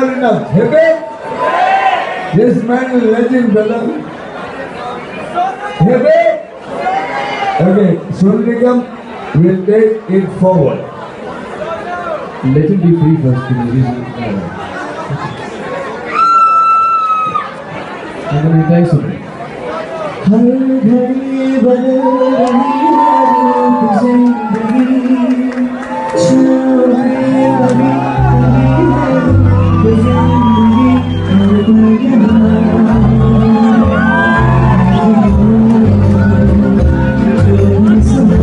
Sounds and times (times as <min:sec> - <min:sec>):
Male speech, man speaking: 0:00.0 - 0:01.1, 0:02.3 - 0:04.0, 0:05.4 - 0:06.5, 0:07.6 - 0:10.9, 0:11.9 - 0:14.5, 0:18.3 - 0:19.2.